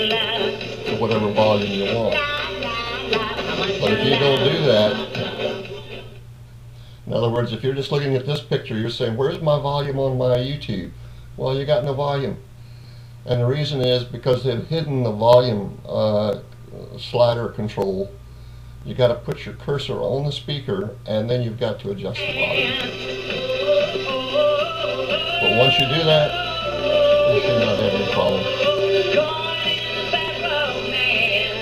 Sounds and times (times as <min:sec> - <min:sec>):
Music: 0:00.0 - 0:06.2, 0:22.2 - 0:31.6
Singing: 0:00.0 - 0:06.2, 0:22.2 - 0:31.6
Speech: 0:00.9 - 0:02.2, 0:03.8 - 0:05.1, 0:07.1 - 0:12.4, 0:13.3 - 0:18.2, 0:18.8 - 0:22.9, 0:25.4 - 0:26.4, 0:27.3 - 0:28.5.